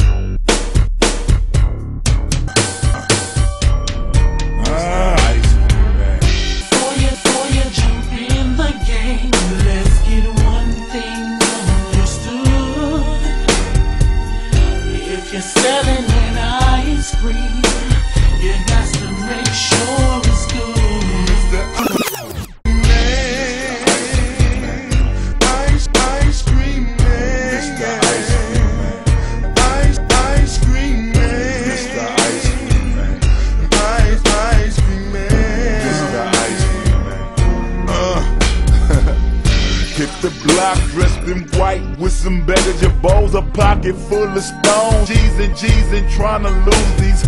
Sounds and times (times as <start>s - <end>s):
Music: 0.0s - 47.2s.